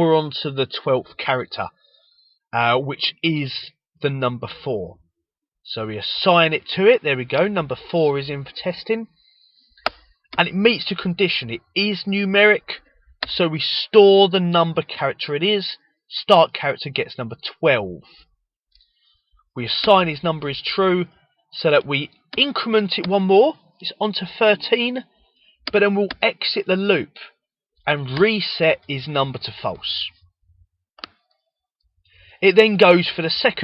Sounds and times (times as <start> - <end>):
Narration, monologue: 0.0 - 33.6.